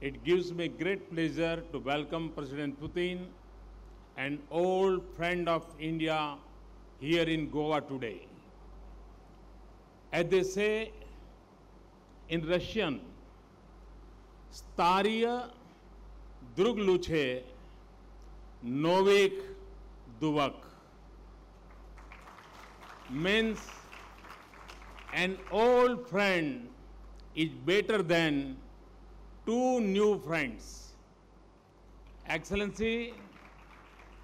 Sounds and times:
Male speech, man speaking: 0:00.0 - 0:03.4, 0:04.2 - 0:08.3, 0:10.2 - 0:11.0, 0:12.3 - 0:13.1, 0:14.6 - 0:15.6, 0:16.5 - 0:17.6, 0:18.7 - 0:19.6, 0:20.2 - 0:20.7, 0:23.1 - 0:23.7, 0:25.2 - 0:26.8, 0:27.4 - 0:28.6, 0:29.5 - 0:31.0, 0:32.3 - 0:33.3
Narration, monologue: 0:00.0 - 0:22.0, 0:22.8 - 0:24.2, 0:24.9 - 0:33.7.

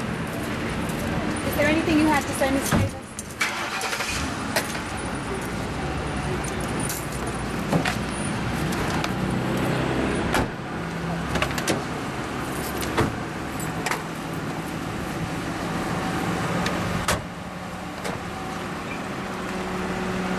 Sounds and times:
Car: 0:00.0 - 0:20.3
Outside, urban or manmade: 0:00.0 - 0:20.3.

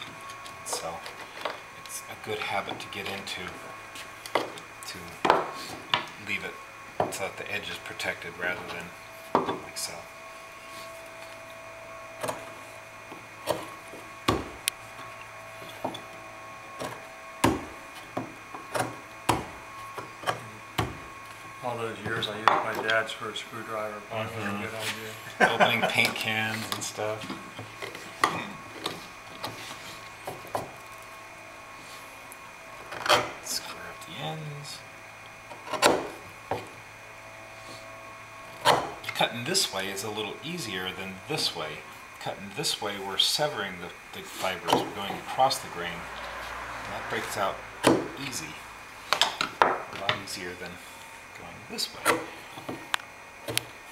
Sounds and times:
Speech: 0:01.9 - 0:03.6, 0:06.2 - 0:08.9, 0:09.6 - 0:10.1, 0:21.6 - 0:27.3, 0:33.5 - 0:34.8, 0:39.1 - 0:46.1, 0:46.9 - 0:48.6, 0:50.0 - 0:50.8, 0:51.4 - 0:52.2.

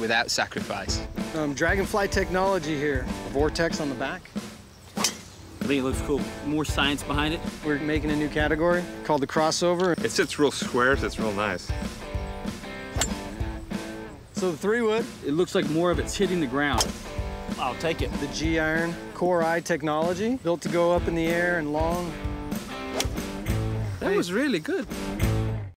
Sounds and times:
Speech: 0:00.0 - 0:04.3, 0:05.6 - 0:11.8, 0:14.4 - 0:16.9, 0:17.5 - 0:22.2, 0:24.0 - 0:24.9
Music: 0:00.0 - 0:25.7.

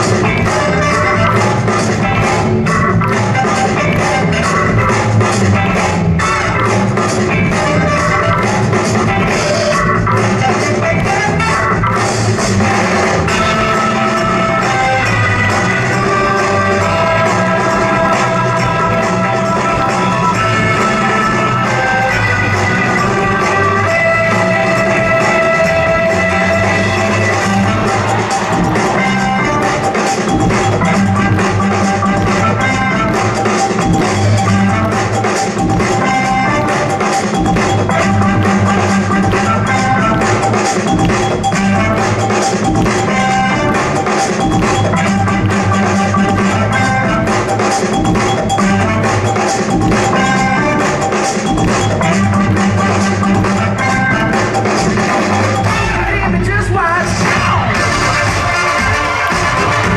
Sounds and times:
Music: 0:00.0 - 0:59.9.

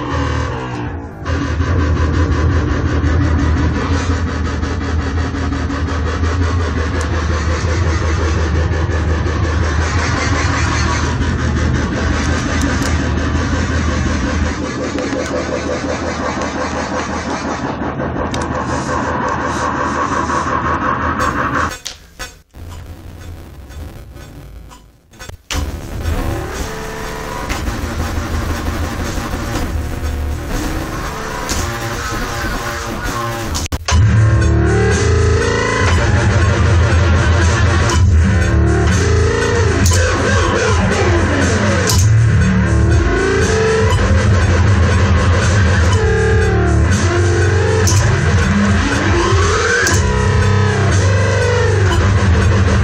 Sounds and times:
Dubstep: 0:00.0 - 0:52.8.

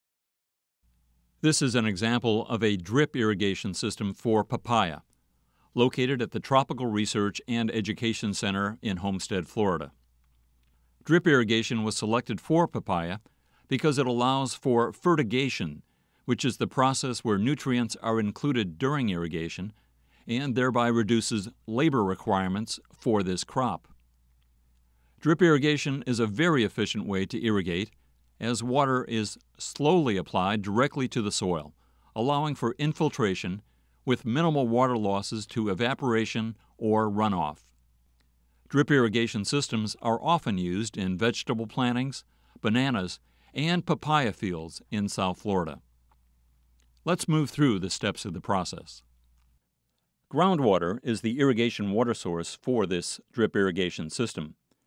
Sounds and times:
Speech: 0:01.4 - 0:05.1, 0:05.8 - 0:10.0, 0:11.0 - 0:24.0, 0:25.2 - 0:37.7, 0:38.7 - 0:45.8, 0:47.0 - 0:49.1, 0:50.3 - 0:54.6.

